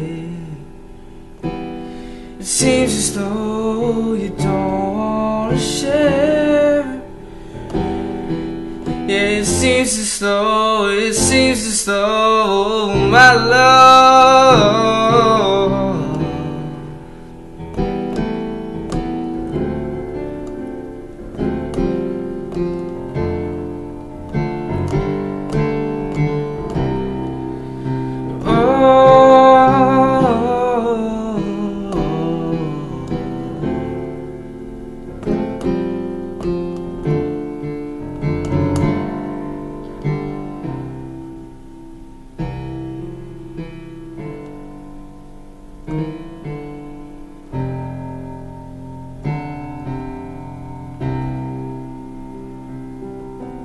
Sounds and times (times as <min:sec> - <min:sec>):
Piano: 0:00.0 - 0:53.6.